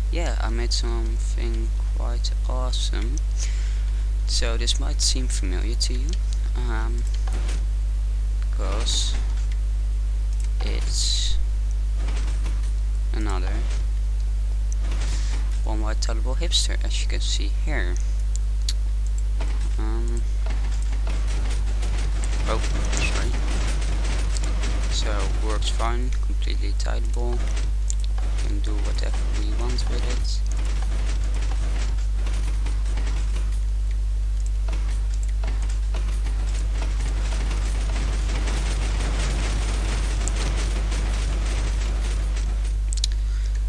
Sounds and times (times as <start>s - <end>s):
Speech: 0.1s - 3.2s, 4.3s - 7.1s, 8.5s - 9.2s, 10.6s - 11.4s, 13.1s - 13.7s, 15.6s - 18.1s, 19.8s - 20.3s, 22.4s - 23.4s, 24.9s - 27.5s, 28.4s - 30.5s.